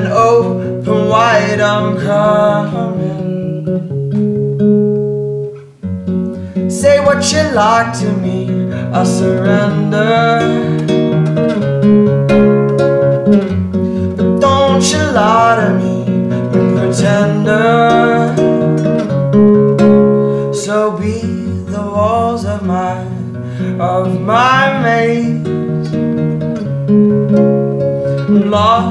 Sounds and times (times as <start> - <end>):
Music: 0.0 - 28.9.